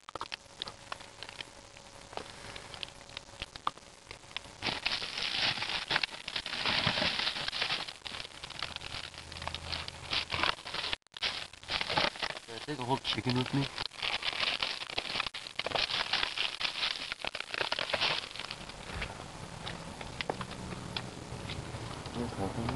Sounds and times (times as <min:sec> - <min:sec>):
Speech: 0:12.5 - 0:13.7, 0:22.2 - 0:22.7.